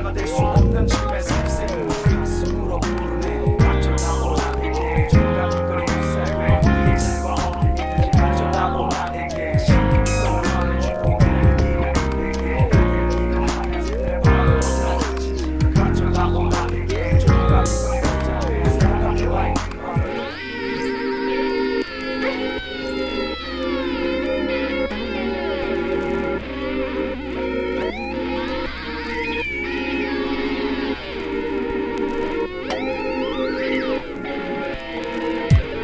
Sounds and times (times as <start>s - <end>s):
Music: 0.0s - 35.8s.